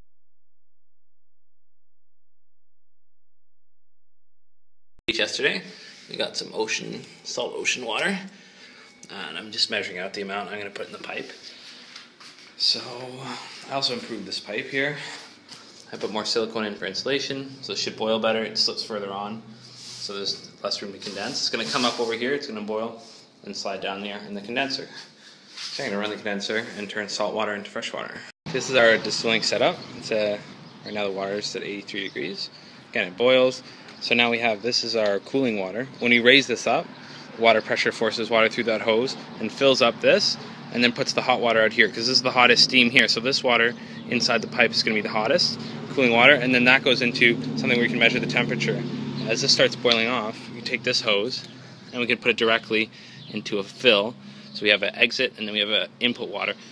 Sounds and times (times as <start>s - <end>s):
Speech: 5.1s - 8.3s, 9.1s - 11.4s, 12.6s - 15.2s, 15.9s - 25.1s, 25.7s - 56.6s.